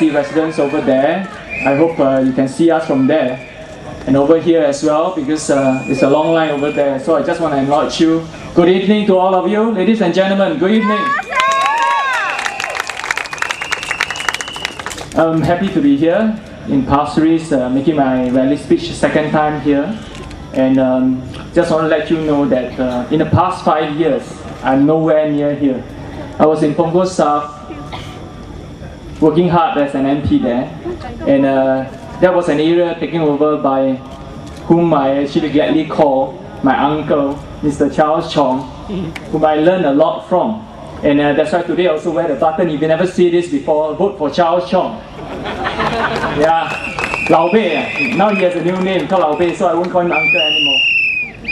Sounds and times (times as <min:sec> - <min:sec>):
Male speech, man speaking: 0:00.0 - 0:03.4, 0:04.1 - 0:11.2, 0:15.2 - 0:20.0, 0:20.6 - 0:25.8, 0:26.4 - 0:27.6, 0:29.2 - 0:34.0, 0:34.7 - 0:38.7, 0:39.3 - 0:45.0, 0:46.4 - 0:50.9.